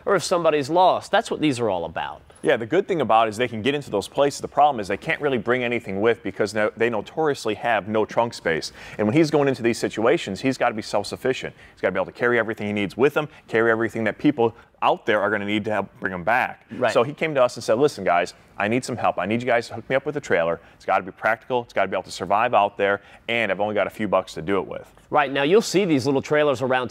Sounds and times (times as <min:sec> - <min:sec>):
Speech: 0:00.1 - 0:26.9.